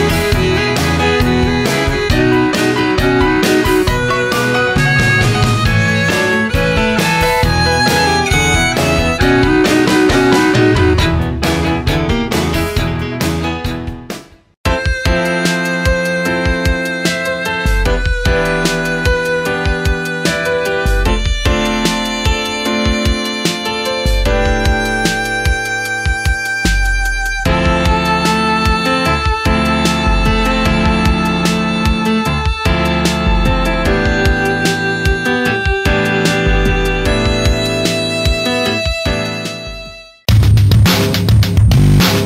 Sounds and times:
Violin, fiddle: 0.0 - 11.3, 14.7 - 40.2.

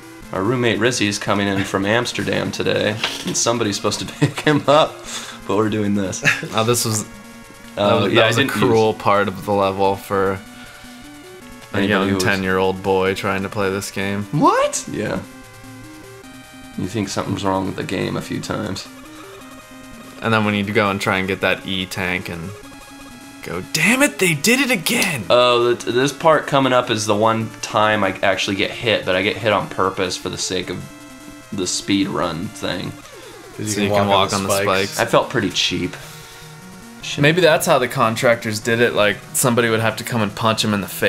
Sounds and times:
Music: 0.0 - 41.0
Speech: 0.4 - 4.9, 5.5 - 7.1, 7.8 - 10.4, 11.8 - 15.2, 16.8 - 18.9, 20.2 - 22.5, 23.4 - 30.9, 31.6 - 33.0, 33.6 - 36.0, 37.0 - 41.0.

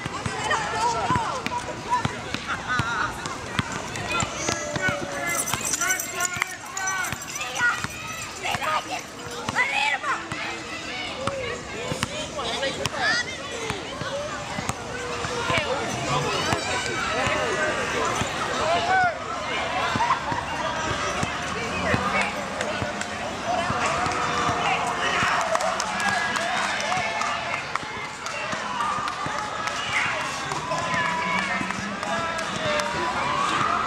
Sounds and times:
Speech: 0.0 - 33.8.

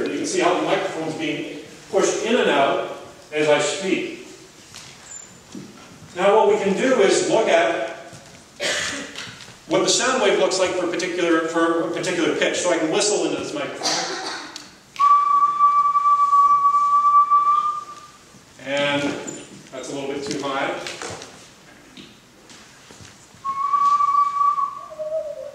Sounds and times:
Speech: 0.0 - 4.4, 6.2 - 8.1, 9.7 - 14.3, 18.6 - 21.0.

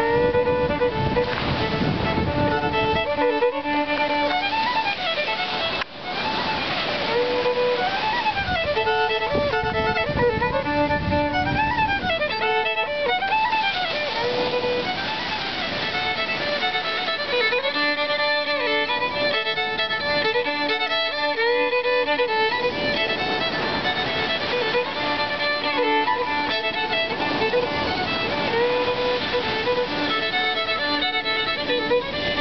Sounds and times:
Violin, fiddle: 0.0 - 32.4.

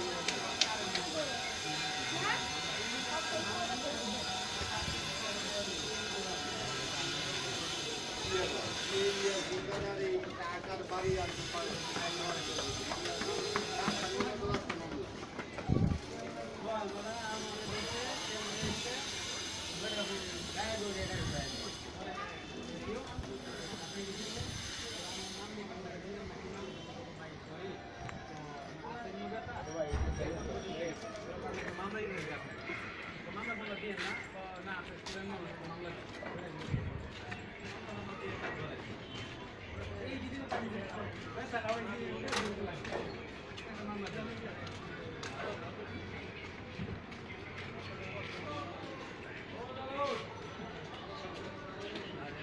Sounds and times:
Speech: 0.0 - 52.4.

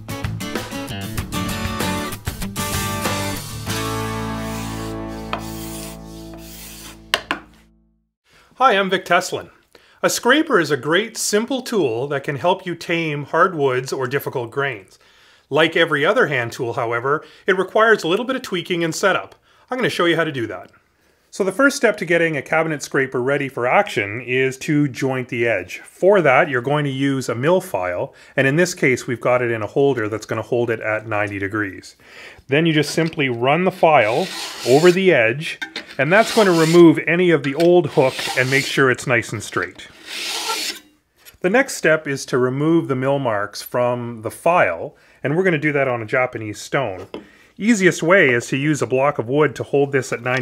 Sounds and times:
Filing (rasp): 4.4 - 7.0, 33.9 - 35.0, 36.0 - 36.9, 37.8 - 38.8, 39.9 - 40.9
Rub: 4.4 - 7.0, 34.0 - 35.0, 36.1 - 36.8, 40.0 - 40.8.

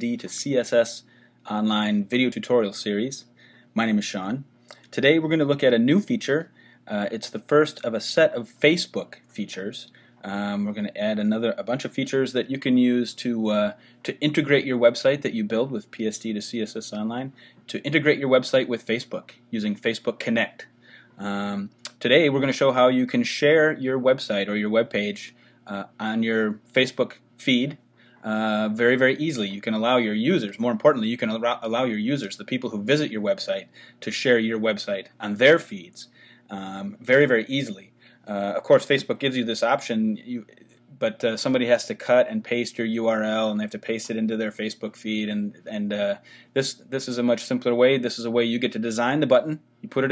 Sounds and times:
Speech: 0.0 - 50.1.

